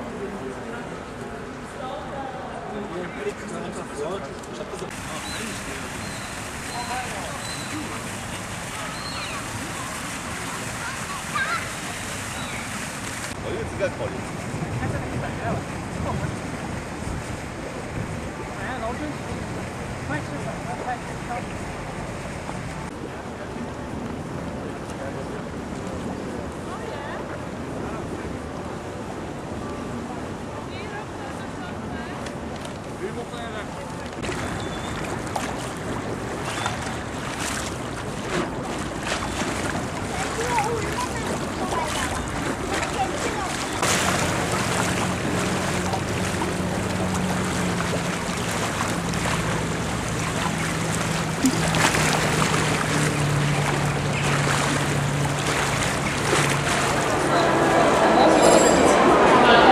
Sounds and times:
Outside, urban or manmade: 0:00.0 - 0:59.7
Slosh: 0:04.9 - 0:13.4, 0:34.2 - 0:57.7
Speech: 0:40.1 - 0:43.8.

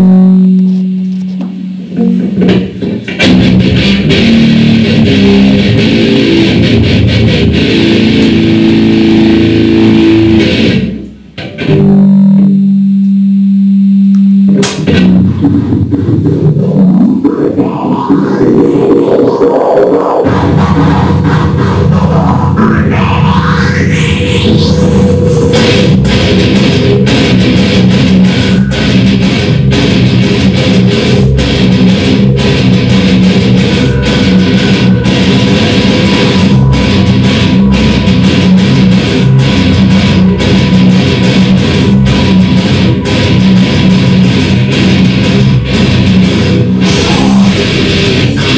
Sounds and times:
Music: 0:00.0 - 0:12.9, 0:14.4 - 0:48.5.

